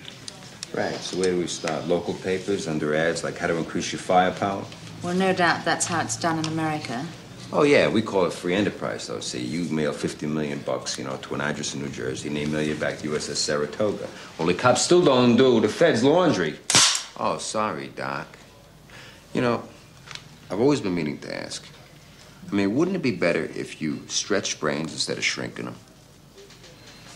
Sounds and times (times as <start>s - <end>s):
Cap gun: 16.7s - 17.2s.